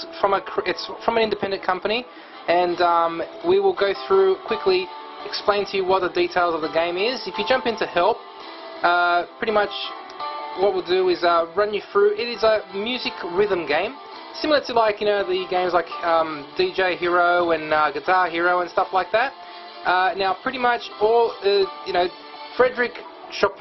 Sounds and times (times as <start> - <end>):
Speech: 0.0 - 8.2, 8.8 - 10.0, 10.6 - 23.6
Background music: 0.0 - 23.6.